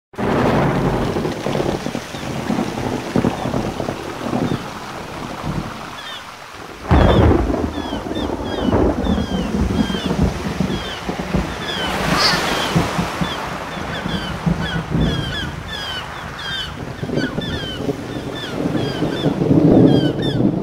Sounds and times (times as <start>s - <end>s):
Rain: 0.1s - 20.6s.